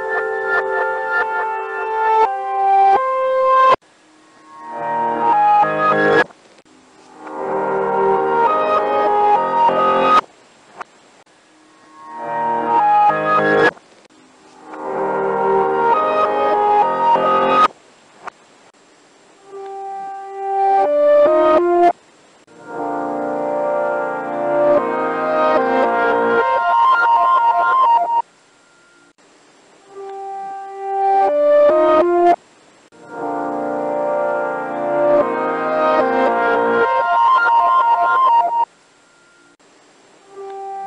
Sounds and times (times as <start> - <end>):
Music: 0.0 - 6.3, 7.0 - 10.2, 11.6 - 13.8, 14.5 - 17.7, 19.4 - 29.2, 29.8 - 32.4, 33.0 - 39.6, 40.2 - 40.8.